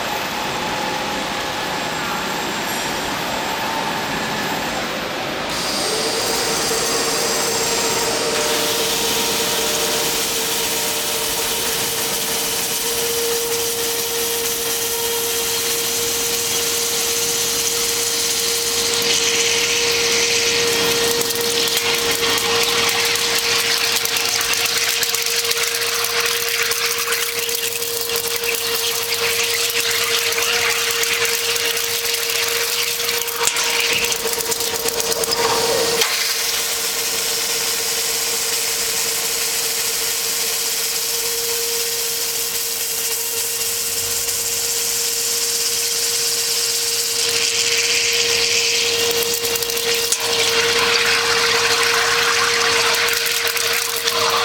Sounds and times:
Drill: 5.4 - 54.4.

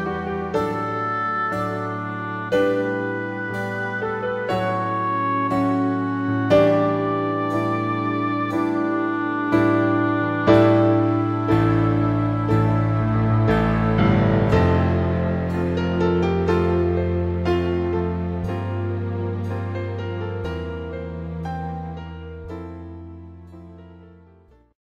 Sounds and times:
Piano: 0.0 - 24.8.

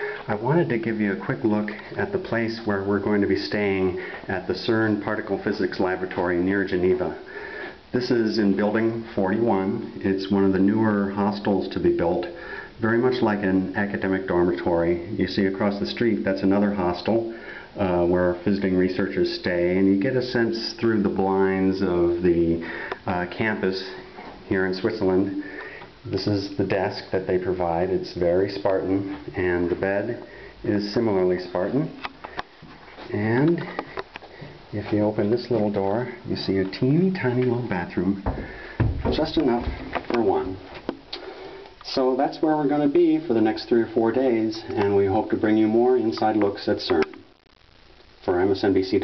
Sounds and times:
Speech: 0.0 - 7.3, 7.9 - 32.1, 33.0 - 33.8, 34.7 - 38.4, 39.0 - 40.8, 41.8 - 47.2, 48.2 - 49.0.

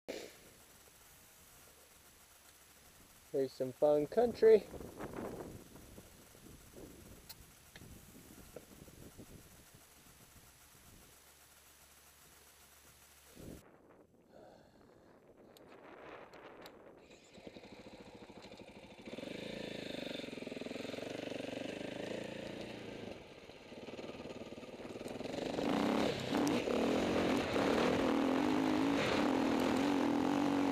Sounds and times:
Outside, rural or natural: 0.1 - 30.7
Speech: 3.3 - 4.7.

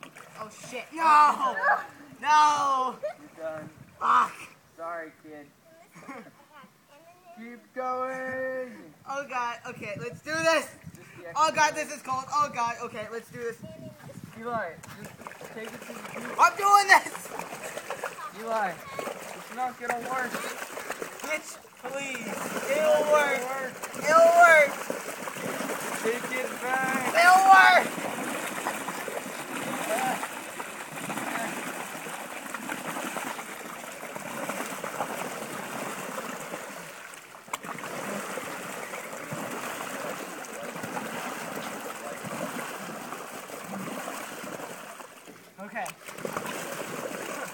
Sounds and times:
Rowboat, canoe, kayak: 0.0 - 47.5.

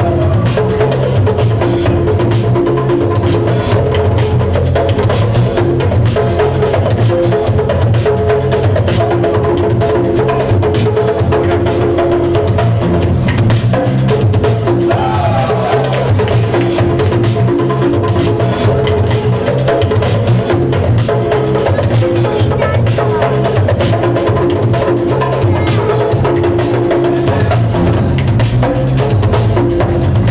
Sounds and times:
Music: 0.0 - 30.3
Speech: 21.8 - 23.4, 25.4 - 26.0.

